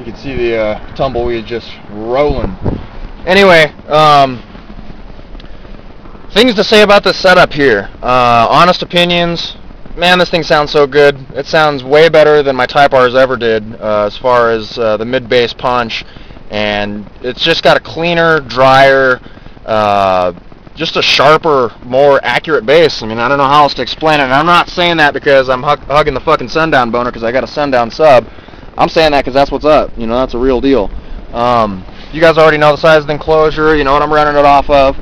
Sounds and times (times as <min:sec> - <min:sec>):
Speech: 0:00.0 - 0:02.6, 0:03.2 - 0:04.4, 0:06.3 - 0:35.0.